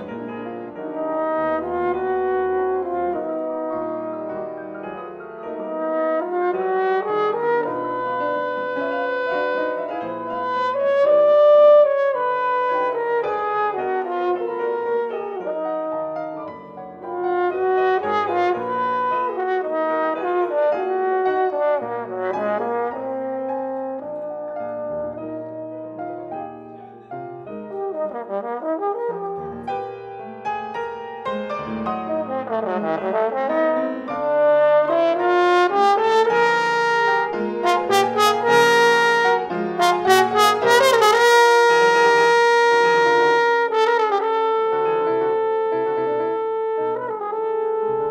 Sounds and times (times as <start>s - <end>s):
French horn: 0.0s - 48.1s
Piano: 0.0s - 48.1s.